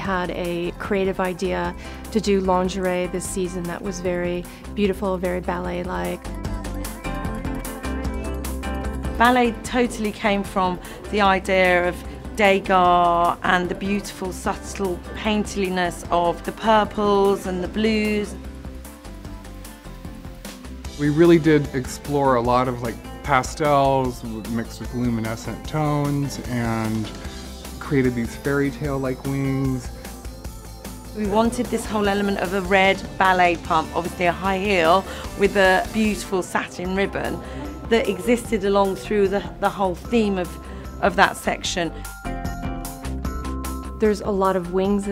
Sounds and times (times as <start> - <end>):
Female speech, woman speaking: 0.0 - 6.2, 9.2 - 18.4, 31.2 - 41.9, 44.0 - 45.1.